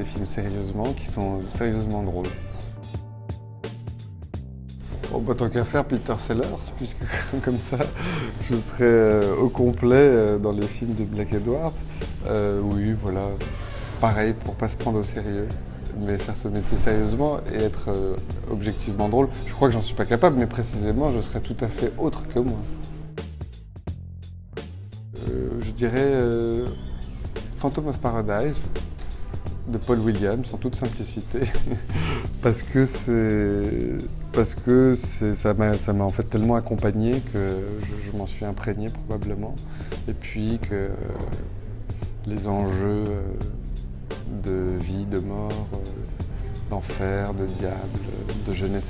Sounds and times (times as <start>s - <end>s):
Speech: 0.0s - 3.0s, 5.1s - 22.8s, 25.2s - 26.8s, 27.6s - 28.8s, 29.6s - 31.8s, 32.4s - 41.5s, 42.2s - 48.9s
Music: 0.0s - 48.9s.